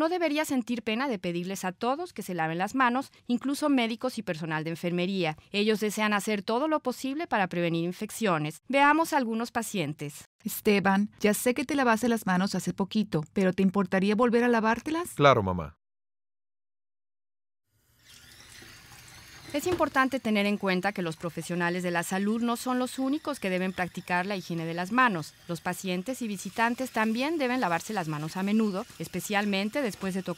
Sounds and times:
Speech: 0:00.0 - 0:15.8, 0:19.6 - 0:30.3.

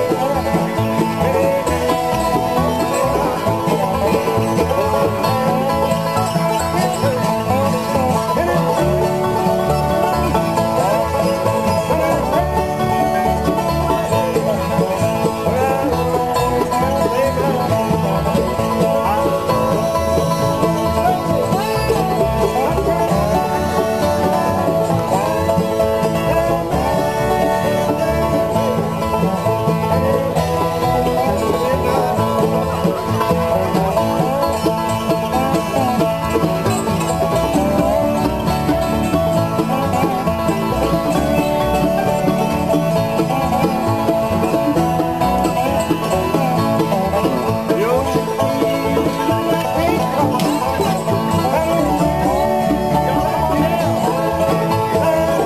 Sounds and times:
Banjo: 0:00.0 - 0:55.4.

